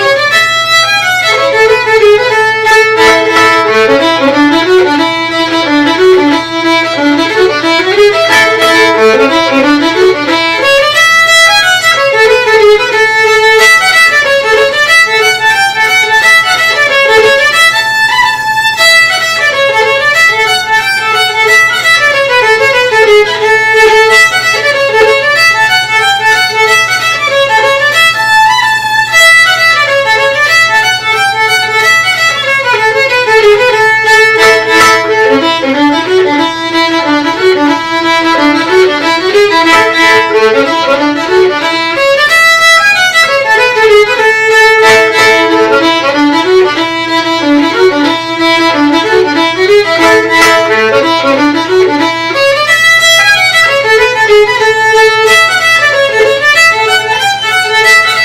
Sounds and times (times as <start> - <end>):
Violin, fiddle: 0.0 - 58.2.